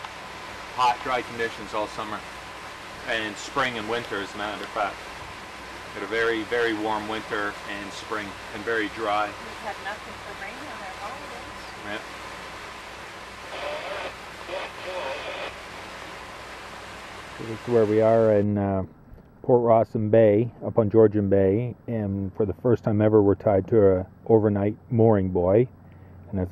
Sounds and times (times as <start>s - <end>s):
Boat, Water vehicle: 0.0s - 15.5s, 22.3s - 26.5s
Speech: 0.8s - 2.2s, 3.1s - 5.0s, 6.0s - 12.0s, 17.4s - 18.9s, 19.5s - 25.7s, 26.3s - 26.5s.